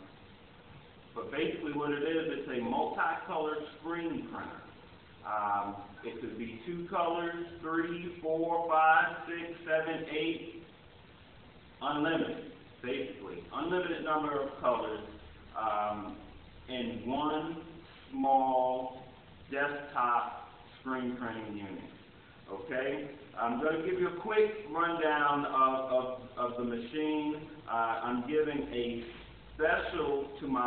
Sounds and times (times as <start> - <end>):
Speech: 1.2 - 10.7, 11.8 - 30.6.